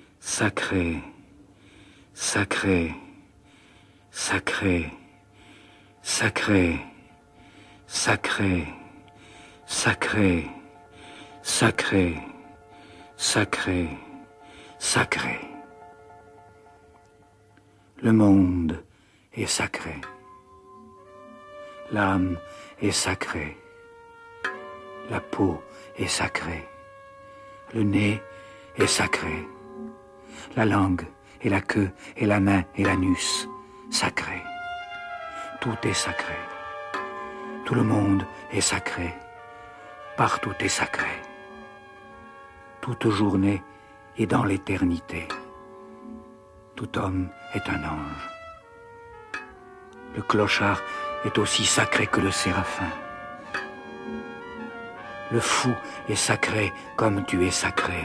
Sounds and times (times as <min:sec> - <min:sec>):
Music: 0:00.0 - 0:58.0
Speech: 0:00.2 - 0:01.2, 0:02.2 - 0:03.2, 0:04.2 - 0:05.1, 0:06.0 - 0:07.0, 0:07.9 - 0:08.9, 0:09.7 - 0:10.6, 0:11.4 - 0:12.4, 0:13.2 - 0:14.2, 0:14.8 - 0:15.6, 0:18.0 - 0:20.1, 0:21.9 - 0:23.6, 0:25.1 - 0:26.7, 0:27.7 - 0:28.2, 0:28.8 - 0:29.5, 0:30.5 - 0:34.5, 0:35.6 - 0:36.5, 0:37.7 - 0:39.2, 0:40.2 - 0:41.2, 0:42.8 - 0:45.4, 0:46.8 - 0:48.3, 0:50.1 - 0:53.0, 0:55.3 - 0:58.0.